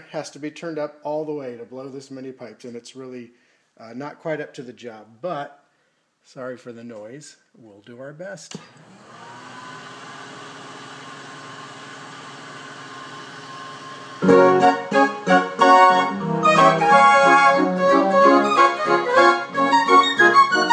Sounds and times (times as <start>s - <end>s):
Speech: 0.0s - 5.6s, 6.2s - 8.6s
Musical instrument: 14.2s - 20.7s.